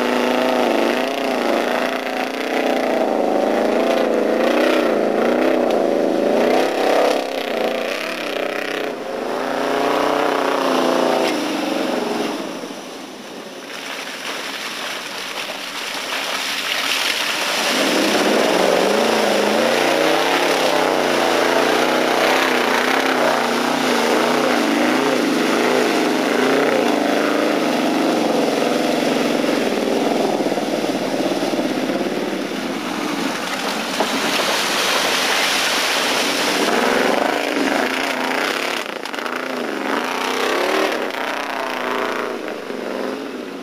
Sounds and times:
Car: 0.0s - 43.6s.

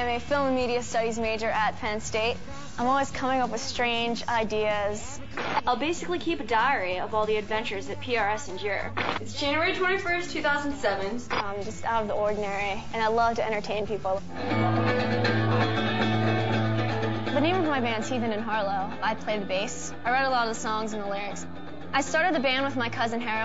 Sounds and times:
Speech: 0.0s - 14.2s, 22.0s - 23.4s
Music: 0.0s - 23.4s.

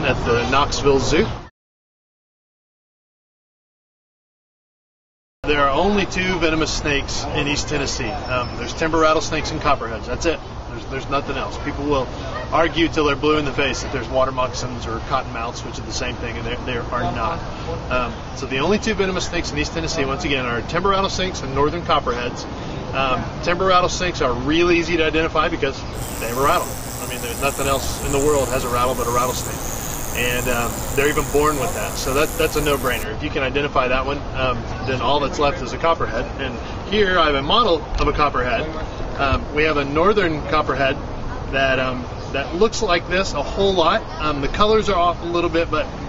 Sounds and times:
Speech: 5.5s - 22.4s, 30.2s - 45.9s.

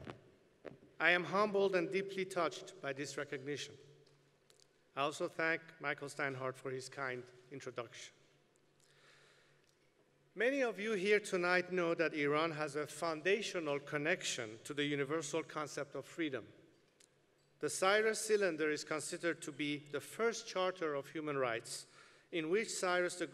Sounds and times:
Narration, monologue: 0.0s - 23.3s
Male speech, man speaking: 1.0s - 3.8s, 5.0s - 8.2s, 10.4s - 16.5s, 17.6s - 23.3s.

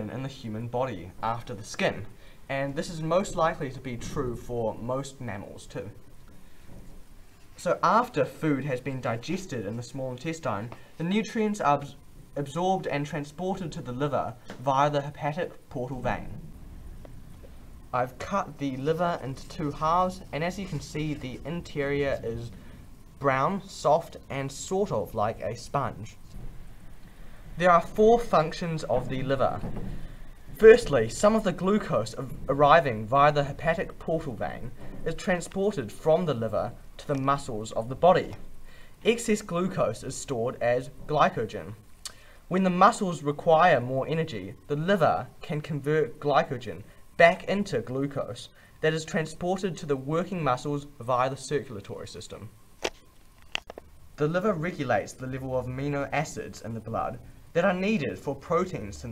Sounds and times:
Speech: 0.0s - 6.0s, 7.6s - 16.4s, 17.9s - 22.6s, 23.2s - 26.3s, 27.6s - 29.7s, 30.6s - 38.4s, 39.0s - 41.8s, 42.5s - 52.5s, 54.2s - 59.1s.

